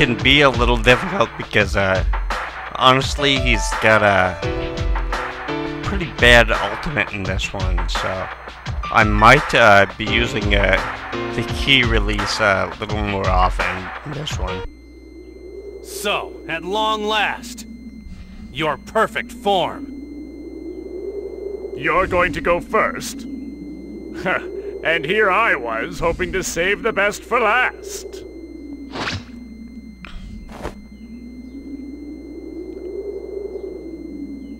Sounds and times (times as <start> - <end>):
Speech: 0.0 - 2.0, 2.7 - 4.4, 5.8 - 8.3, 8.9 - 14.7, 15.9 - 17.6, 18.6 - 19.8, 21.8 - 23.2, 24.2 - 28.2.